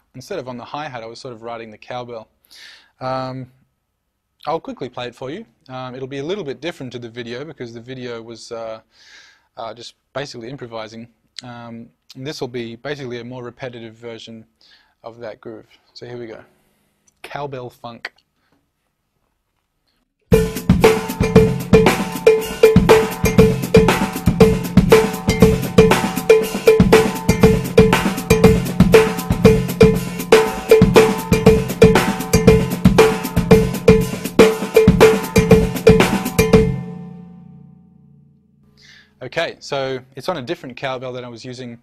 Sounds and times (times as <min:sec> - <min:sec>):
Drum kit: 0:20.3 - 0:38.4
Bass drum: 0:20.4 - 0:38.6.